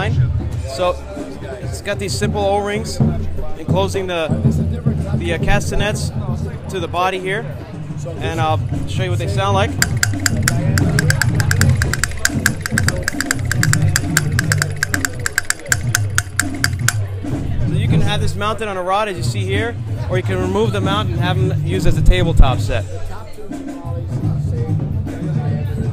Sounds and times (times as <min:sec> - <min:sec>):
Speech: 0:00.0 - 0:09.8, 0:17.0 - 0:25.9
Music: 0:00.0 - 0:25.9.